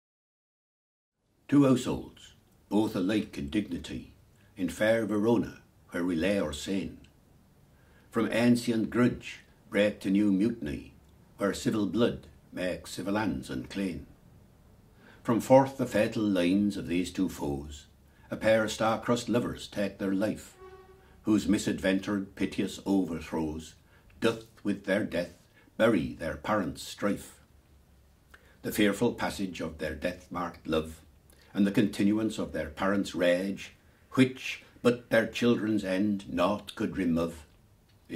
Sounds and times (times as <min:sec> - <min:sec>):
Speech: 0:01.5 - 0:07.1, 0:08.1 - 0:14.1, 0:15.2 - 0:20.6, 0:21.2 - 0:27.5, 0:28.6 - 0:38.1.